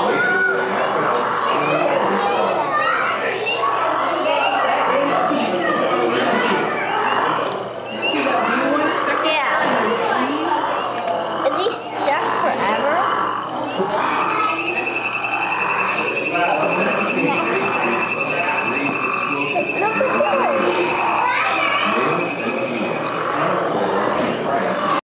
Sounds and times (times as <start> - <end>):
Frog: 4.0 - 25.0.